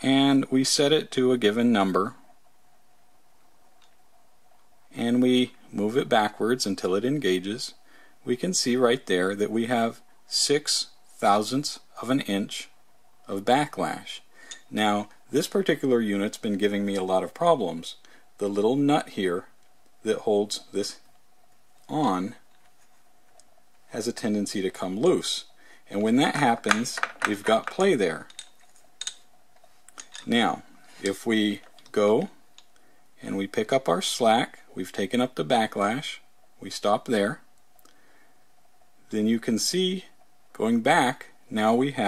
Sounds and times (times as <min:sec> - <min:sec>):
Speech: 0:00.0 - 0:02.2, 0:04.9 - 0:21.1, 0:21.9 - 0:22.5, 0:23.9 - 0:28.3, 0:30.2 - 0:32.4, 0:33.2 - 0:37.5, 0:39.1 - 0:42.0
Inside, small room: 0:00.0 - 0:42.0.